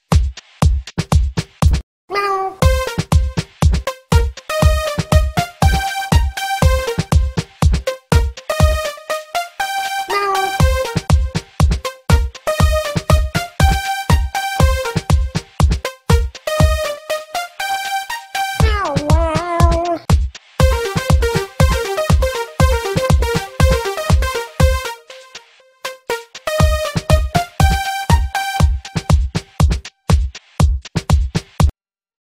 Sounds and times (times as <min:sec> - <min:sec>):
Music: 0:00.0 - 0:01.8, 0:02.6 - 0:31.7.